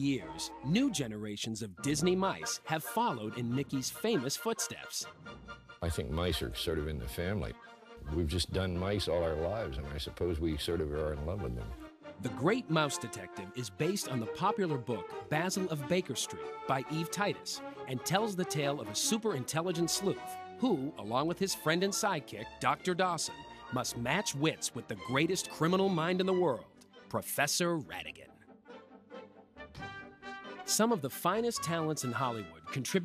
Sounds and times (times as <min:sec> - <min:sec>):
Speech: 0:00.0 - 0:05.1, 0:05.8 - 0:28.3, 0:30.7 - 0:33.0
Music: 0:00.0 - 0:33.0.